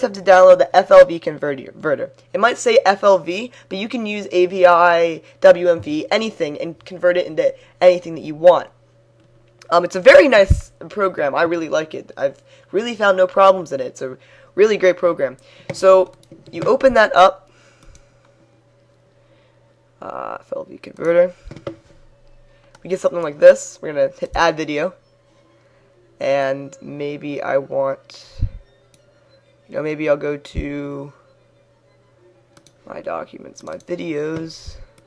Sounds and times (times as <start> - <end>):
Speech: 0.0 - 8.7, 9.6 - 17.4, 20.0 - 21.4, 22.9 - 25.0, 26.2 - 28.4, 29.7 - 31.2, 32.9 - 34.9.